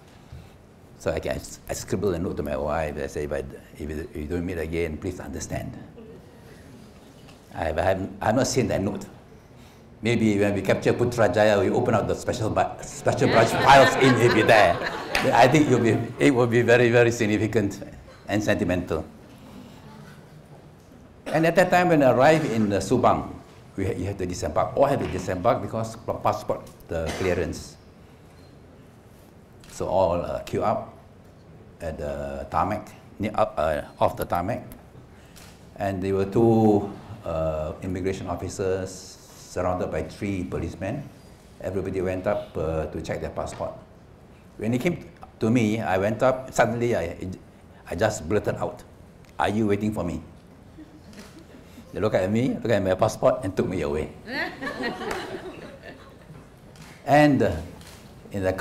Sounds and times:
Speech: 1.0s - 6.1s, 7.5s - 9.2s, 10.0s - 19.1s, 21.3s - 27.8s, 35.8s - 43.8s, 44.6s - 50.3s, 51.9s - 54.2s, 57.1s - 57.7s, 58.3s - 58.6s
Laughter: 13.1s - 16.2s, 50.8s - 51.8s, 54.3s - 56.4s.

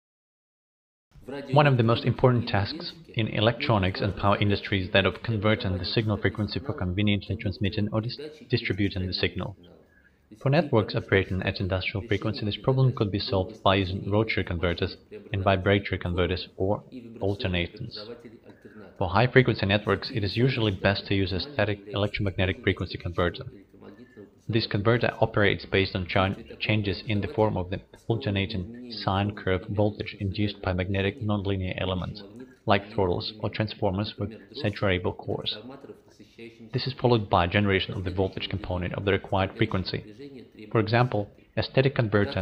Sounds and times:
Speech: 1.2s - 42.4s.

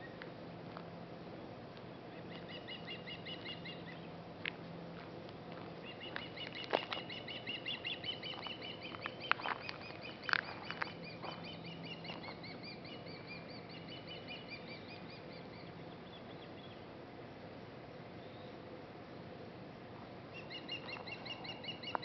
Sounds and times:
Bird vocalization, bird call, bird song: 1.9s - 4.2s, 5.8s - 16.9s, 18.2s - 18.6s, 20.3s - 22.0s.

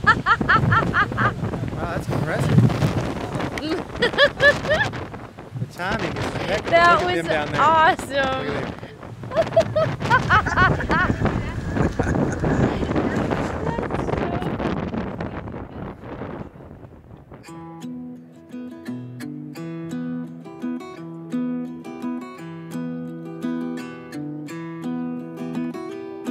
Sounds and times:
Wind noise (microphone): 0.0s - 17.5s.

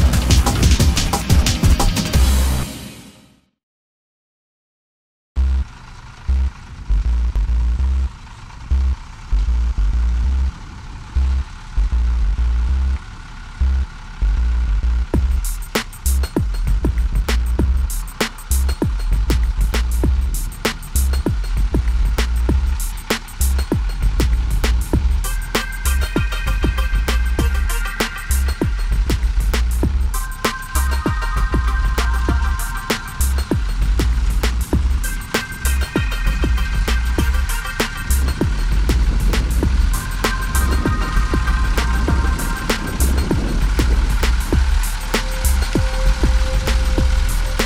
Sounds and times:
Music: 0.0s - 3.5s, 15.2s - 47.6s
Truck: 0.0s - 3.6s, 5.4s - 47.6s.

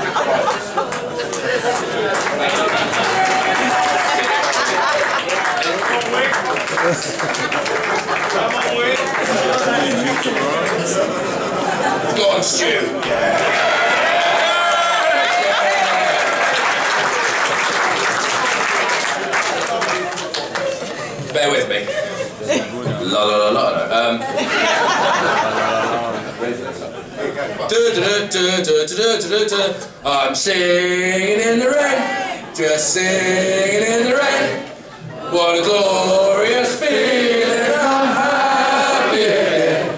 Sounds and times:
Male singing: 27.7s - 34.6s, 35.3s - 39.9s.

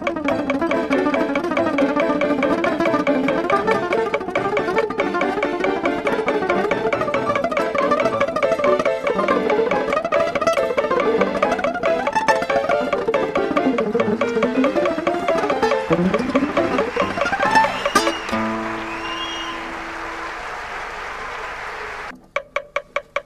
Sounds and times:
Acoustic guitar: 0.0s - 20.0s.

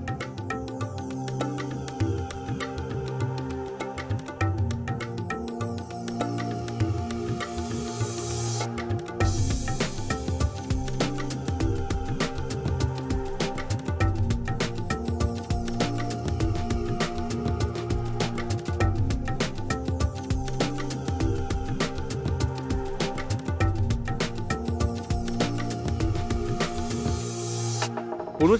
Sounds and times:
Music: 0.0s - 28.5s.

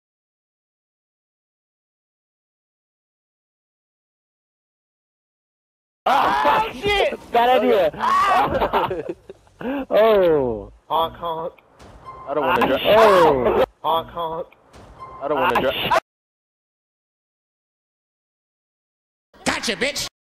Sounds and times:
Speech: 6.1s - 8.6s, 9.9s - 11.6s, 12.3s - 14.5s, 19.4s - 20.2s.

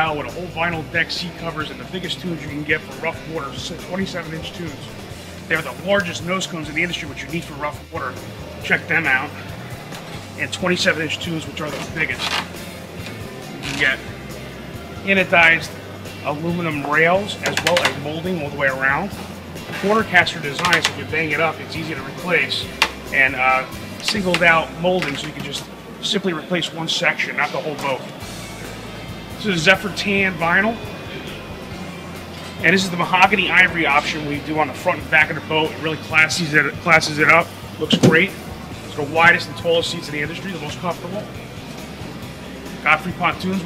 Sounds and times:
Speech: 0.0s - 4.9s, 5.5s - 9.4s, 10.4s - 12.3s, 13.7s - 14.0s, 15.0s - 28.1s, 29.4s - 30.8s, 32.6s - 41.3s, 42.8s - 43.6s
Music: 0.0s - 43.6s.

